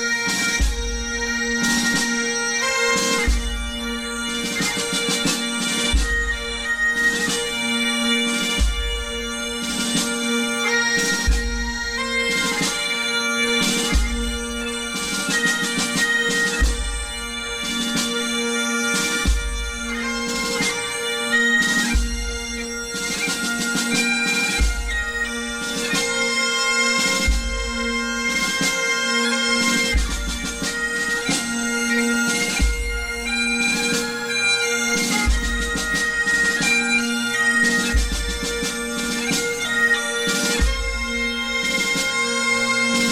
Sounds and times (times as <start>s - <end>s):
Bagpipes: 0.0s - 43.1s.